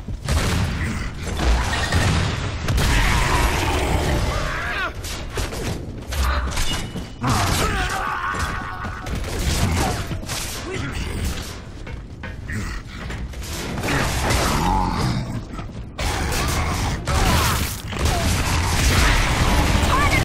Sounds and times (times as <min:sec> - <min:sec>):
Speech: 0:19.8 - 0:20.2.